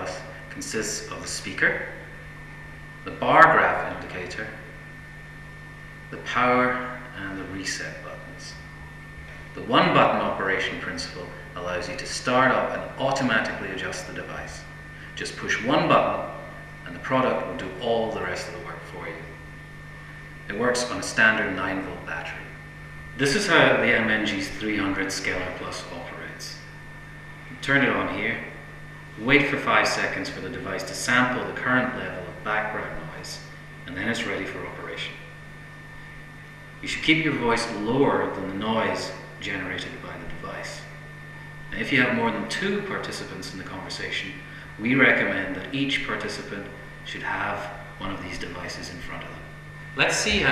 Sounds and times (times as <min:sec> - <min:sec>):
Speech: 0:00.0 - 0:02.0, 0:03.1 - 0:04.7, 0:06.1 - 0:08.6, 0:09.6 - 0:19.4, 0:20.5 - 0:22.6, 0:23.2 - 0:26.6, 0:27.5 - 0:28.6, 0:29.2 - 0:35.3, 0:36.8 - 0:41.0, 0:41.7 - 0:50.5.